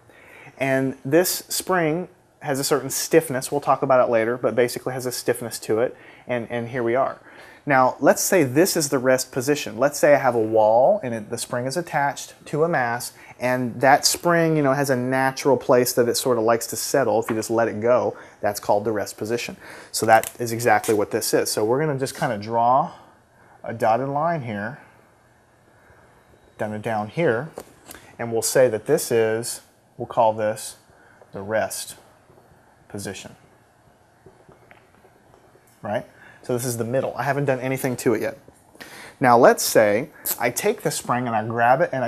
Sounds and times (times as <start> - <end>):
Speech: 0.6 - 24.9, 26.6 - 27.6, 28.2 - 30.8, 31.4 - 32.0, 32.9 - 33.4, 35.8 - 38.4, 39.2 - 42.0.